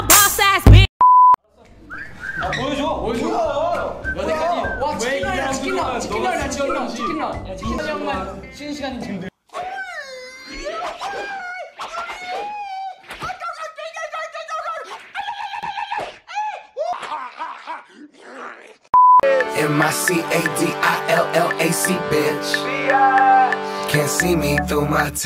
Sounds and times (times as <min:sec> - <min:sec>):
Music: 0:00.0 - 0:00.9, 0:02.6 - 0:09.3, 0:19.2 - 0:25.2.